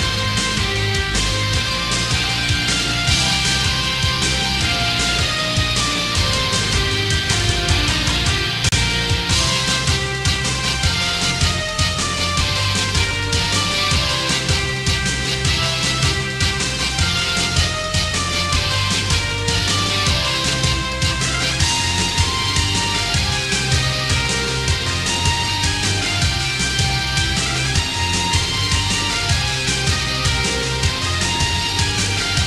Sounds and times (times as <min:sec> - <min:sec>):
Soundtrack music: 0:00.0 - 0:32.4
Theme music: 0:00.0 - 0:32.4.